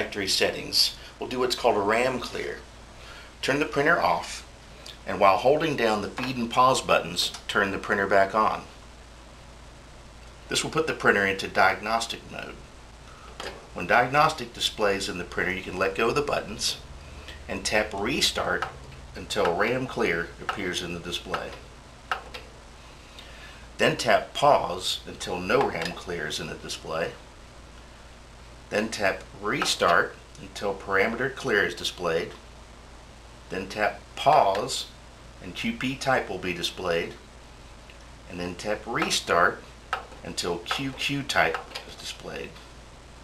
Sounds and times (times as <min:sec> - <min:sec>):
Speech: 0:00.0 - 0:02.7, 0:03.4 - 0:08.8, 0:10.5 - 0:12.6, 0:13.8 - 0:16.8, 0:17.5 - 0:21.6, 0:23.8 - 0:27.2, 0:28.7 - 0:32.4, 0:33.5 - 0:37.2, 0:38.3 - 0:42.6.